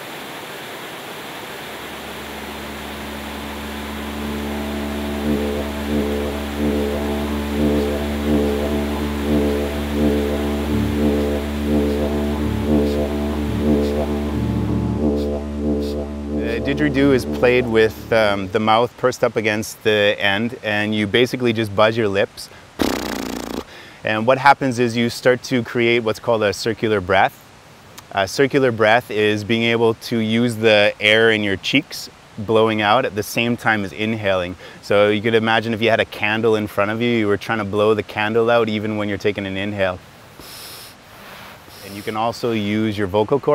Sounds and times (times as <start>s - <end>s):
Speech: 16.4s - 22.5s, 24.0s - 27.4s, 28.0s - 40.0s, 41.8s - 43.5s.